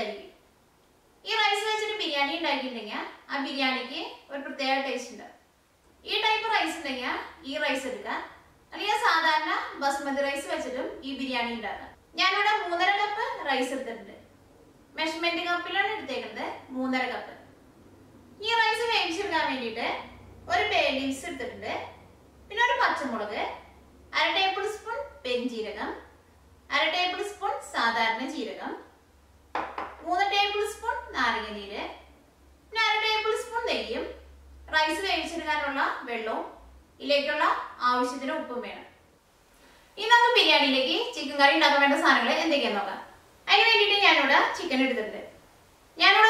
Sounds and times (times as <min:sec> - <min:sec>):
Speech: 0:01.2 - 0:05.4, 0:06.0 - 0:14.2, 0:15.0 - 0:17.4, 0:18.4 - 0:26.0, 0:26.7 - 0:28.9, 0:32.7 - 0:39.0, 0:40.0 - 0:45.4, 0:46.0 - 0:46.2.